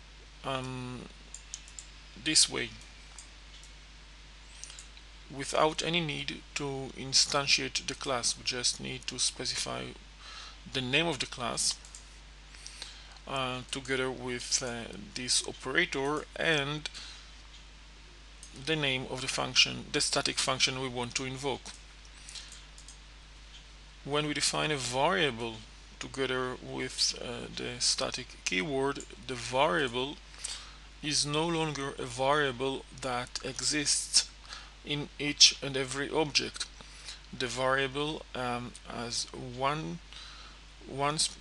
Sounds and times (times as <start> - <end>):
Speech: 0.4 - 1.2, 2.2 - 2.8, 5.3 - 10.0, 10.7 - 11.8, 13.2 - 17.0, 18.6 - 21.8, 24.1 - 30.2, 31.0 - 36.7, 37.3 - 40.1, 40.8 - 41.4.